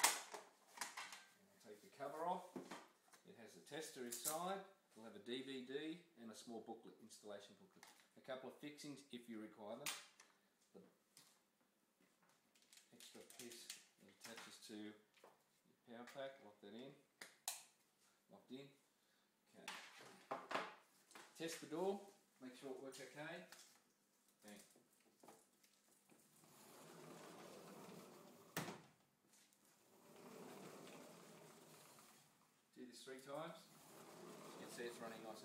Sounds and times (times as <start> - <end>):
Speech: 1.4 - 2.6, 3.2 - 9.9, 12.9 - 15.1, 15.8 - 17.0, 18.3 - 18.8, 21.4 - 23.5, 24.4 - 24.7, 32.7 - 33.7, 34.4 - 35.4.